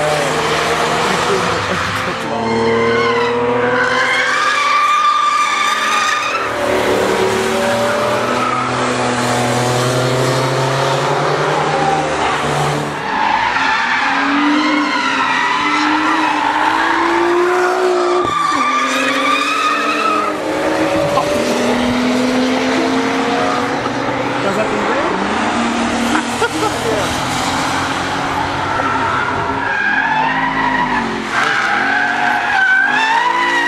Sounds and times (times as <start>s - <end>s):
Race car, auto racing: 0.0s - 33.6s
Skidding: 0.0s - 33.6s
Tire squeal: 0.9s - 9.3s, 11.5s - 21.5s, 26.1s - 33.6s.